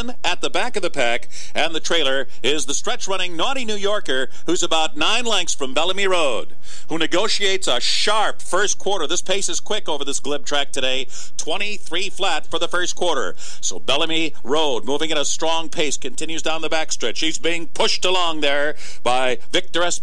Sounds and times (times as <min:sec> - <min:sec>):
Speech: 0:00.0 - 0:20.0.